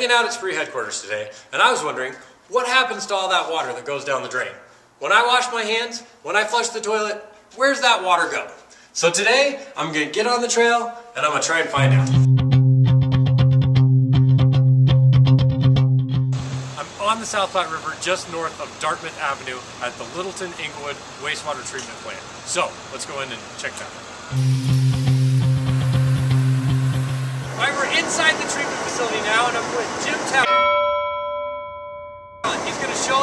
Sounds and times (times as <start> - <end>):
Speech: 0.0 - 12.3, 16.8 - 24.0, 27.6 - 30.5, 32.5 - 33.2.